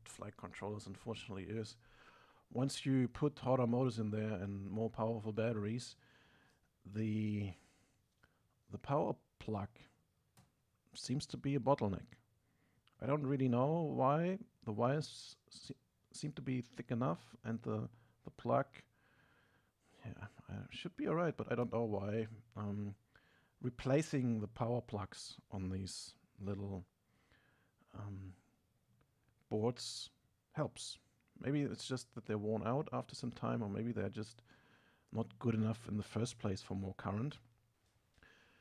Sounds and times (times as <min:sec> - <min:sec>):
Speech: 0:00.0 - 0:01.8, 0:02.5 - 0:06.0, 0:06.8 - 0:07.6, 0:08.7 - 0:10.0, 0:10.9 - 0:12.3, 0:13.0 - 0:18.9, 0:20.0 - 0:23.0, 0:23.6 - 0:26.9, 0:27.9 - 0:28.5, 0:29.4 - 0:34.5, 0:35.1 - 0:37.5.